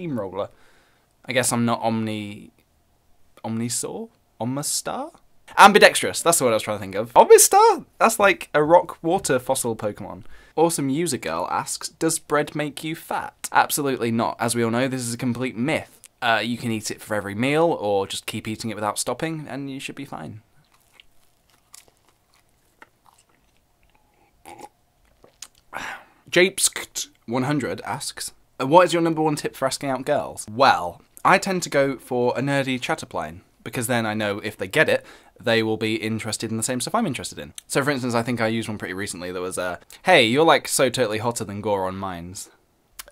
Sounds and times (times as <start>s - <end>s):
Speech: 0.0s - 0.5s, 1.3s - 2.5s, 3.4s - 20.4s, 26.3s - 43.1s
Inside, small room: 0.0s - 43.1s.